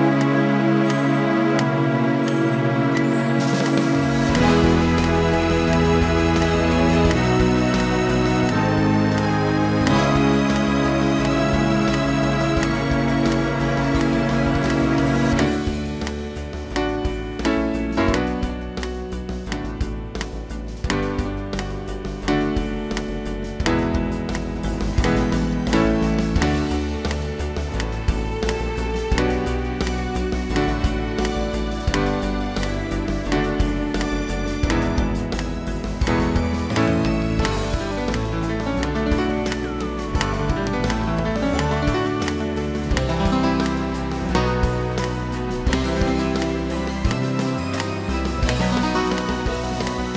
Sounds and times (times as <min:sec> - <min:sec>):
Guitar: 0:00.0 - 0:50.1.